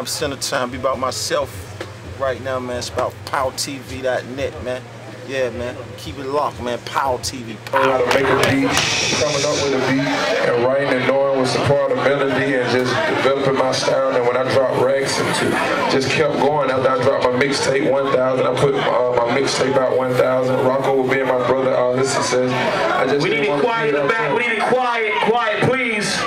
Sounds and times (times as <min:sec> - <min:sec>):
Speech: 0:00.0 - 0:01.6, 0:02.2 - 0:26.2.